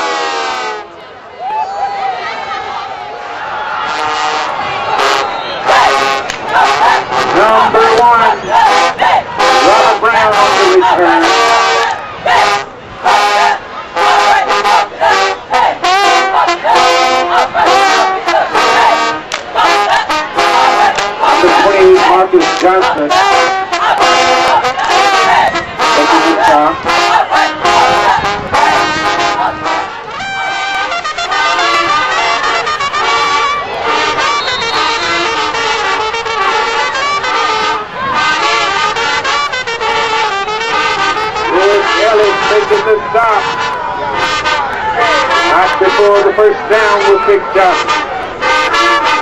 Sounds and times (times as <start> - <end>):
Music: 8.4 - 46.4, 47.0 - 49.2
Speech: 9.6 - 11.4, 21.4 - 23.2, 25.9 - 26.8, 41.5 - 43.5, 45.0 - 47.9.